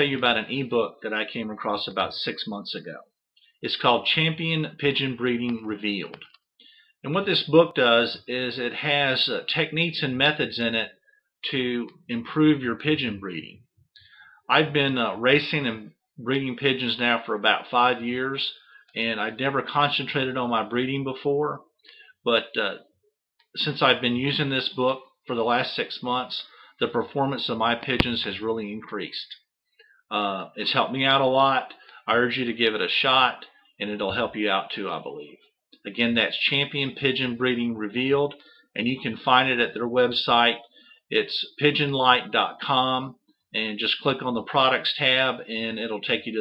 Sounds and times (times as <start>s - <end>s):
Speech: 0.0s - 6.3s, 7.0s - 13.6s, 14.5s - 22.8s, 23.6s - 29.5s, 30.1s - 46.4s.